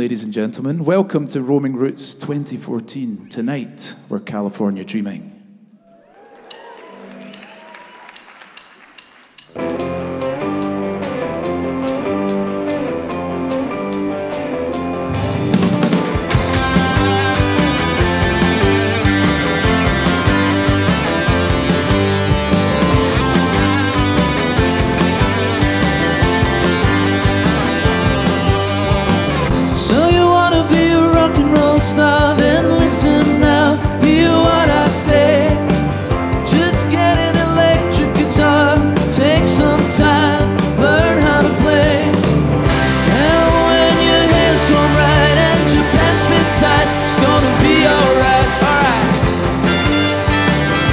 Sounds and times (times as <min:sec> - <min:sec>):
Rock and roll: 0:09.4 - 0:50.9.